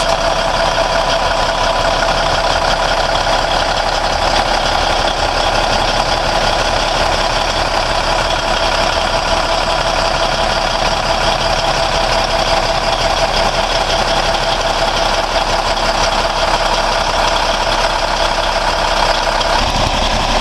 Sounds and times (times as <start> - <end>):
Vehicle: 0.0 - 20.4.